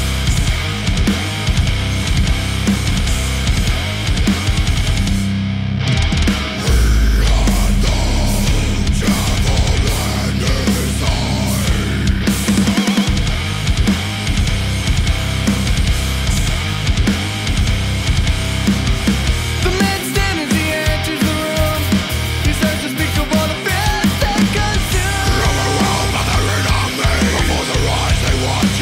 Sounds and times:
Funk: 0:00.0 - 0:28.8
Pop music: 0:06.6 - 0:13.2, 0:19.6 - 0:28.8.

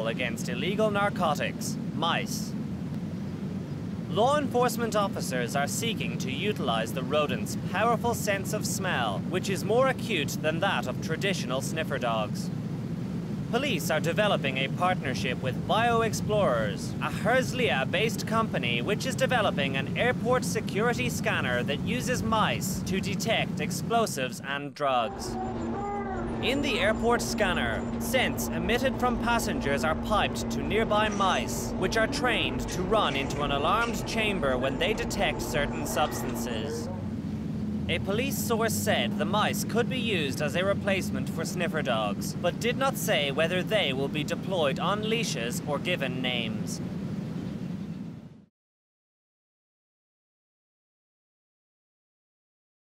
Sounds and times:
Speech: 0:00.0 - 0:02.5, 0:04.1 - 0:12.5, 0:13.6 - 0:25.5, 0:26.1 - 0:36.9, 0:37.9 - 0:46.8.

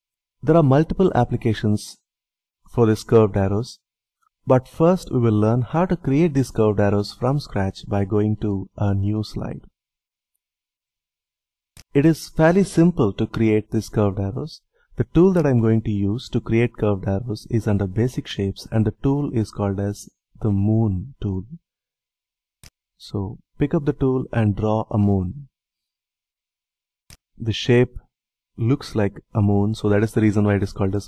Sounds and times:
Speech: 0:00.4 - 0:02.0, 0:02.7 - 0:03.8, 0:04.5 - 0:09.7, 0:11.9 - 0:21.6, 0:23.0 - 0:25.5, 0:27.4 - 0:31.0.

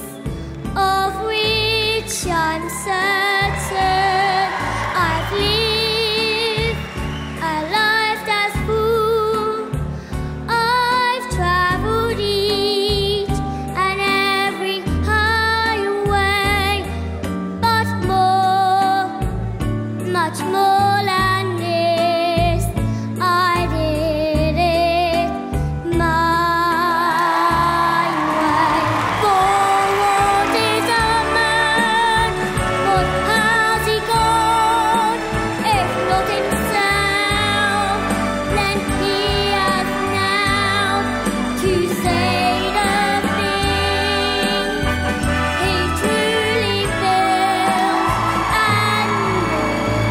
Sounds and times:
Inside, large room or hall: 0:00.0 - 0:50.1
Music: 0:00.0 - 0:50.1.

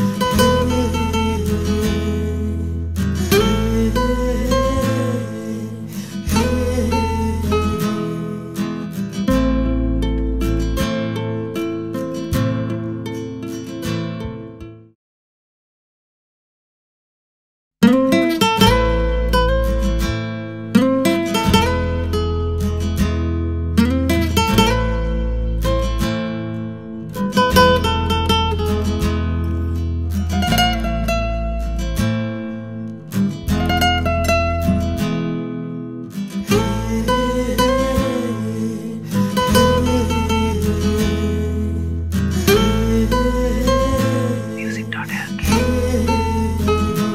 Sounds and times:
Music: 0:00.0 - 0:15.0, 0:17.8 - 0:47.1.

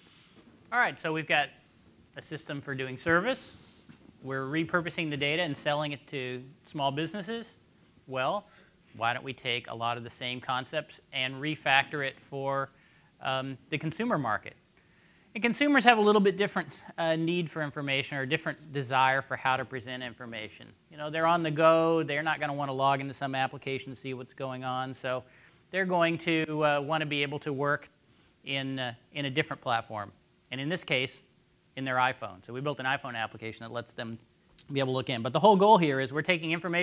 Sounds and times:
Speech: 0:00.8 - 0:01.6, 0:02.2 - 0:03.6, 0:04.2 - 0:14.6, 0:15.4 - 0:36.8.

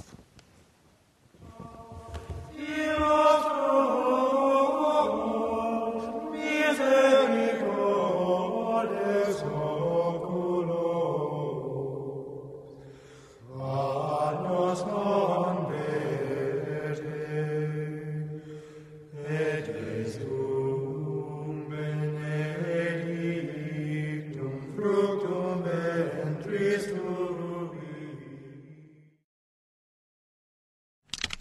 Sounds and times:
Chant: 0:01.4 - 0:28.8.

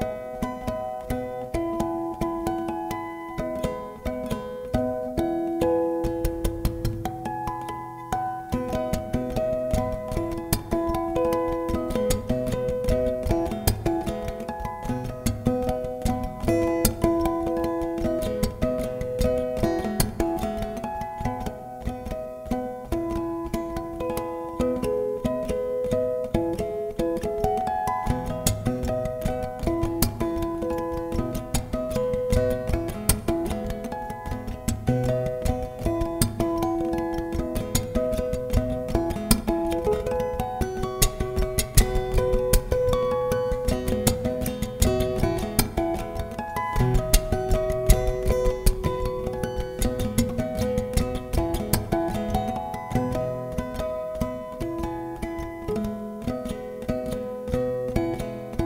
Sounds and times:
Music: 0:00.0 - 0:58.6.

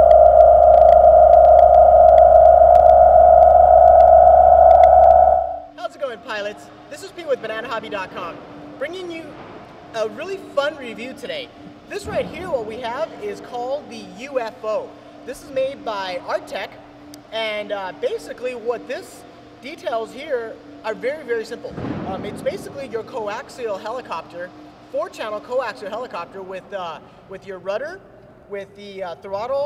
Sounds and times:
Speech: 0:05.8 - 0:09.4, 0:10.0 - 0:29.6.

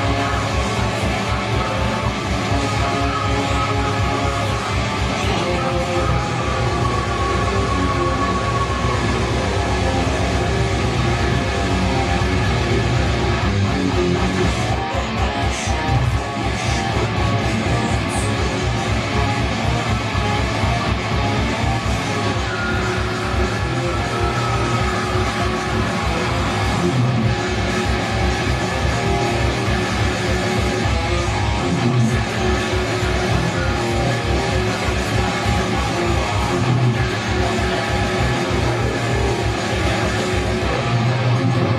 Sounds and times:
Electric guitar: 0:00.0 - 0:41.7
Strum: 0:00.0 - 0:41.7.

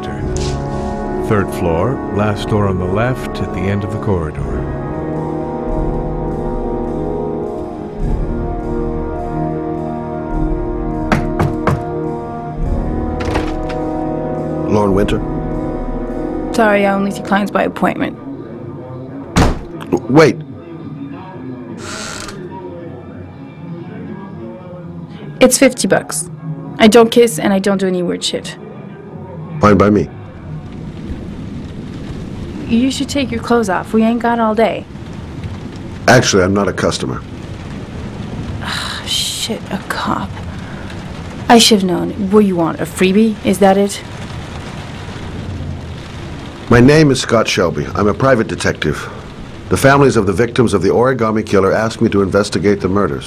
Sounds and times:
Music: 0:00.0 - 0:36.6, 0:38.7 - 0:44.4
Speech: 0:01.3 - 0:04.6, 0:19.8 - 0:20.4, 0:29.6 - 0:30.1, 0:41.5 - 0:44.0, 0:46.7 - 0:53.2.

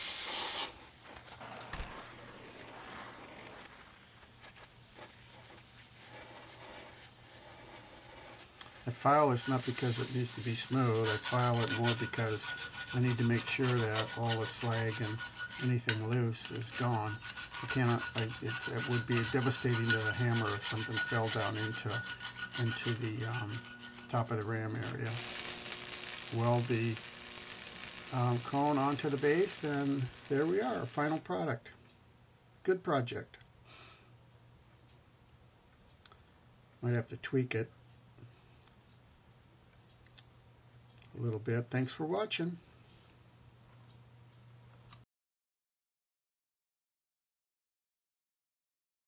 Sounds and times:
Rub: 0:04.9 - 0:25.3, 0:28.0 - 0:31.2
Filing (rasp): 0:06.0 - 0:31.2.

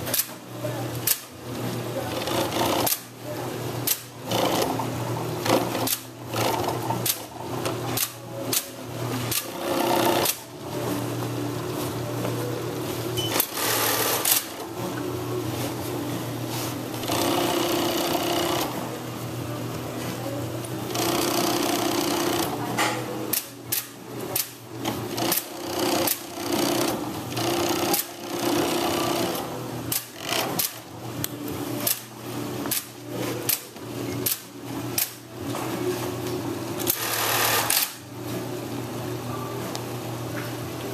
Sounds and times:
Speech: 0:00.3 - 0:04.3, 0:18.8 - 0:20.9, 0:22.2 - 0:24.4
Sewing machine: 0:02.1 - 0:03.1, 0:03.9 - 0:04.8, 0:05.4 - 0:07.3, 0:08.0 - 0:10.4, 0:13.2 - 0:14.7, 0:16.9 - 0:18.8, 0:20.9 - 0:22.6, 0:23.3 - 0:30.9, 0:36.8 - 0:38.0.

